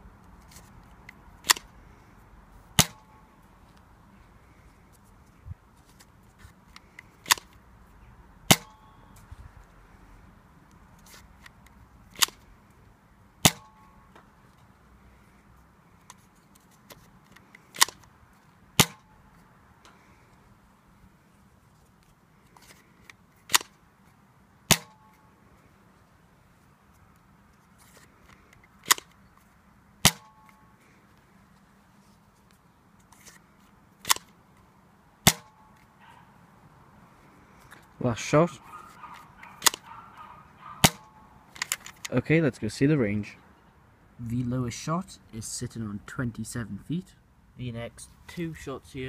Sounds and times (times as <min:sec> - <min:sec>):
Outside, urban or manmade: 0:00.0 - 0:49.0
Cap gun: 0:02.8 - 0:03.1, 0:08.5 - 0:08.8, 0:13.4 - 0:13.8, 0:18.8 - 0:19.0, 0:23.5 - 0:23.7, 0:24.7 - 0:25.0, 0:30.0 - 0:30.4, 0:35.2 - 0:35.6, 0:39.6 - 0:39.8, 0:40.8 - 0:41.8
Speech: 0:38.0 - 0:38.6, 0:42.1 - 0:43.4, 0:44.2 - 0:49.0.